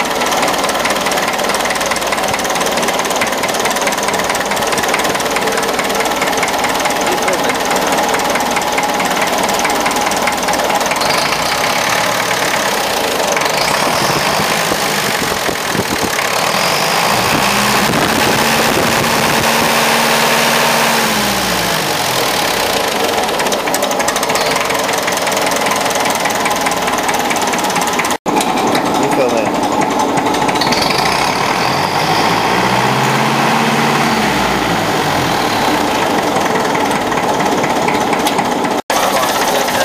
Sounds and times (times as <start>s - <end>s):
Engine: 0.0s - 39.8s
Speech: 7.1s - 7.8s, 28.9s - 29.6s, 38.9s - 39.8s.